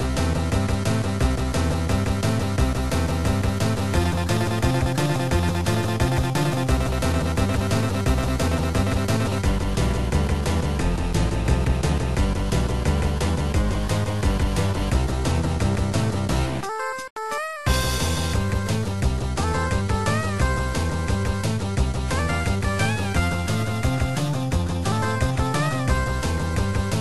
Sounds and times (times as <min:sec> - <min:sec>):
Rock and roll: 0:00.0 - 0:16.6, 0:17.7 - 0:27.0.